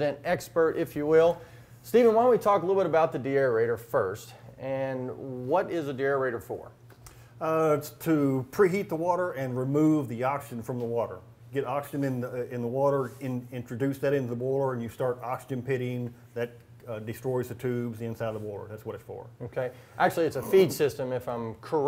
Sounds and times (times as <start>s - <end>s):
Speech: 0.0s - 6.8s, 7.4s - 21.8s.